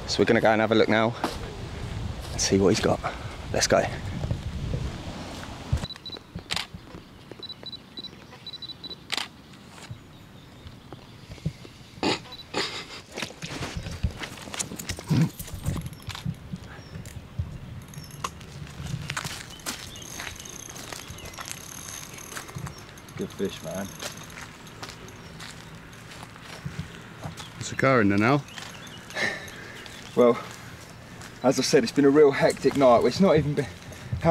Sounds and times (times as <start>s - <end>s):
Speech: 0.1s - 1.2s, 2.4s - 4.0s, 23.2s - 23.9s, 27.6s - 28.4s, 31.4s - 34.3s.